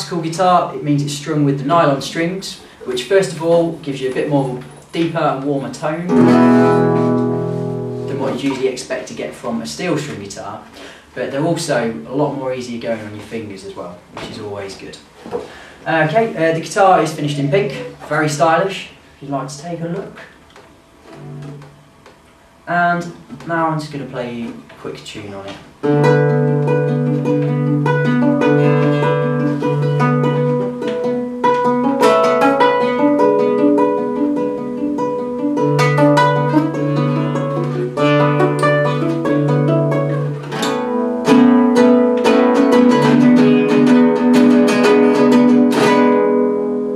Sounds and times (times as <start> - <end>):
Speech: 0.0 - 6.2, 8.1 - 15.1, 15.9 - 20.4, 22.7 - 25.7
Acoustic guitar: 0.0 - 9.0, 21.0 - 21.9, 25.4 - 46.9.